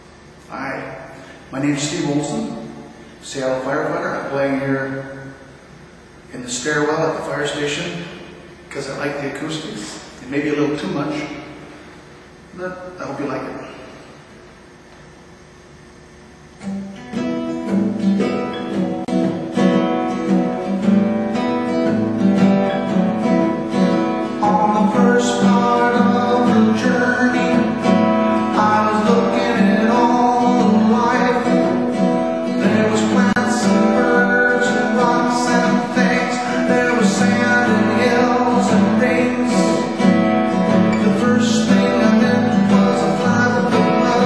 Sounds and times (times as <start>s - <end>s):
Music: 16.6s - 44.2s.